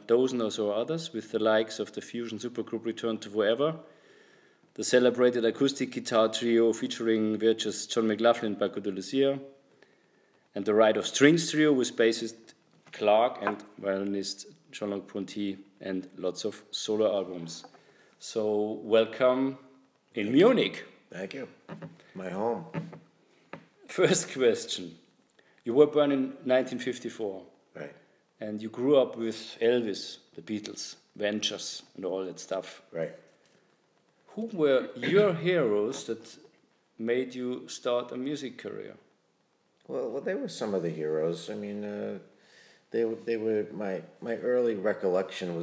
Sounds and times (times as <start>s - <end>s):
Speech: 0.0s - 3.9s, 4.8s - 9.5s, 10.6s - 21.6s, 22.2s - 22.8s, 23.8s - 25.0s, 25.7s - 33.2s, 34.3s - 36.4s, 37.0s - 39.1s, 39.9s - 42.3s, 43.0s - 45.6s.